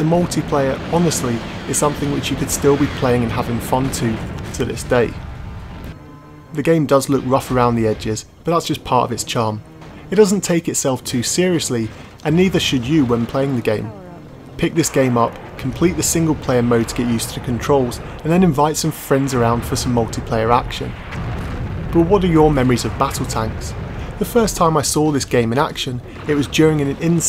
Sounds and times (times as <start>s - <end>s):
Speech: 0.0s - 5.2s, 6.6s - 21.0s, 21.9s - 27.2s.